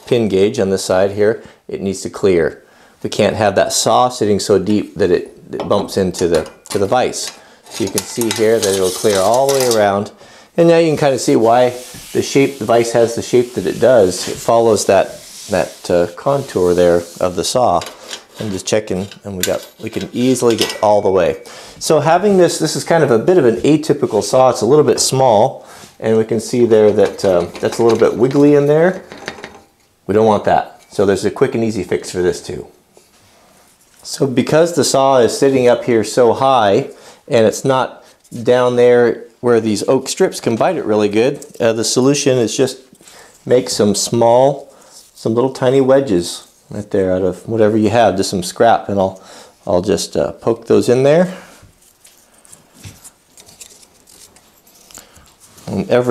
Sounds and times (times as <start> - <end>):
Speech: 0.0 - 29.1, 30.1 - 32.8, 34.0 - 42.9, 43.5 - 51.4, 55.7 - 56.1.